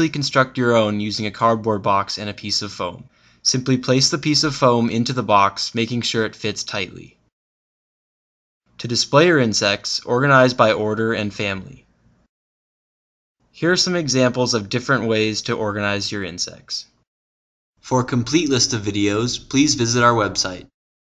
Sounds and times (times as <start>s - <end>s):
Speech: 0.0s - 7.2s, 8.8s - 11.9s, 13.6s - 17.0s, 17.8s - 20.8s.